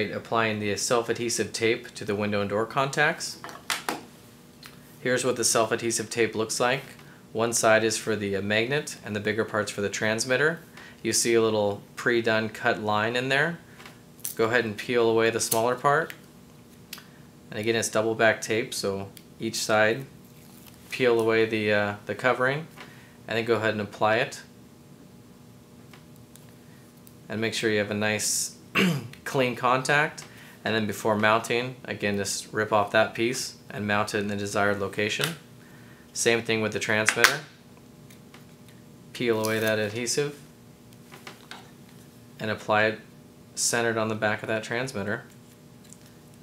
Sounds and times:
Speech: 0.0 - 3.4, 5.0 - 13.6, 14.3 - 16.2, 17.5 - 20.1, 20.9 - 22.7, 23.3 - 24.5, 27.3 - 35.4, 36.2 - 37.5, 39.2 - 40.4, 42.4 - 45.3.

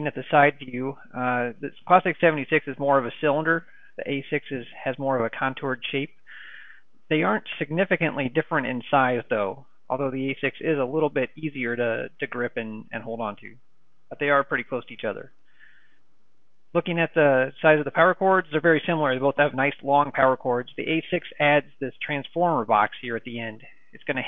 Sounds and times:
Speech: 0.0 - 6.2, 7.1 - 15.4, 16.7 - 24.2.

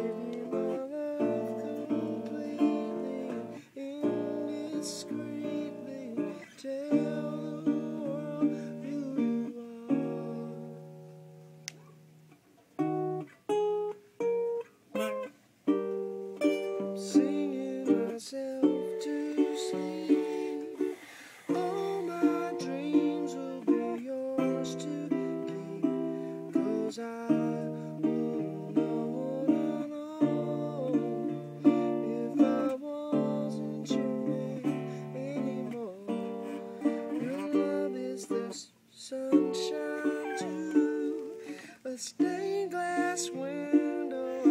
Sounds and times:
Singing: 0.0 - 10.8, 16.8 - 44.5
Guitar: 0.0 - 44.5
Ukulele: 0.0 - 44.5.

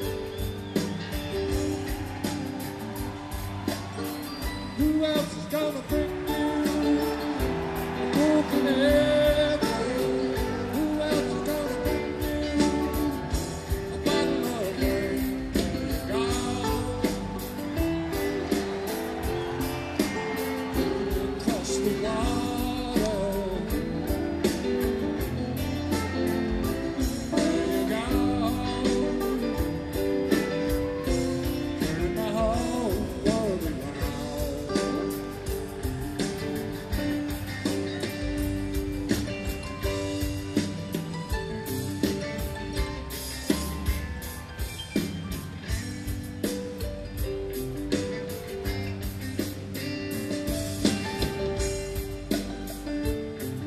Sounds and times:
Music: 0.0 - 53.6.

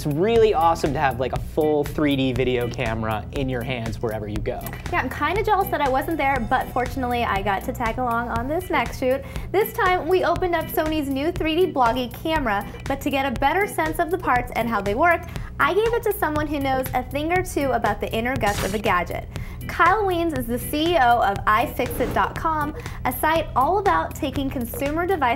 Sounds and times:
Music: 0.0 - 25.3.

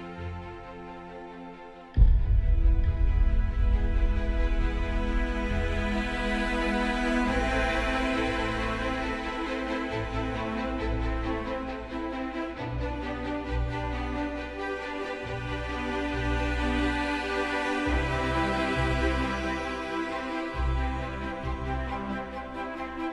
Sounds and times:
Music: 0.0 - 23.1.

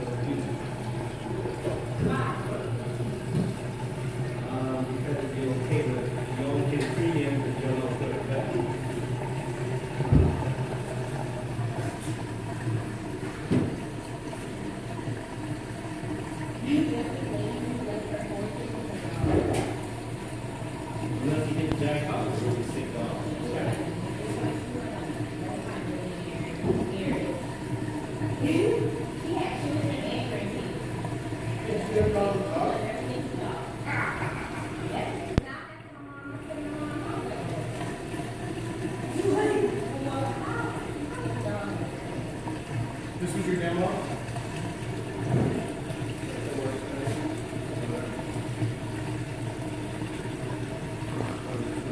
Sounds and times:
Speech: 2.0 - 3.0, 16.6 - 19.5.

